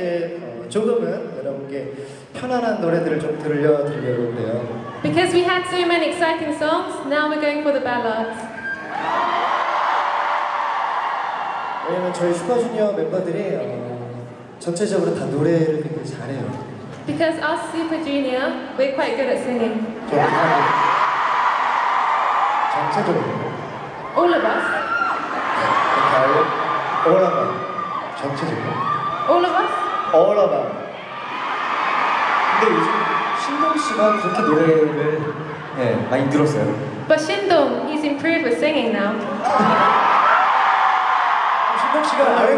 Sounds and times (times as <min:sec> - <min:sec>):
Male speech, man speaking: 0:00.0 - 0:04.8, 0:11.8 - 0:16.6, 0:20.1 - 0:20.7, 0:22.7 - 0:23.5, 0:26.0 - 0:27.6, 0:28.2 - 0:28.8, 0:30.1 - 0:30.8, 0:32.5 - 0:36.8, 0:41.8 - 0:42.5
Conversation: 0:00.0 - 0:42.5
Female speech, woman speaking: 0:05.1 - 0:08.5, 0:17.1 - 0:19.9, 0:24.2 - 0:24.8, 0:37.1 - 0:39.3.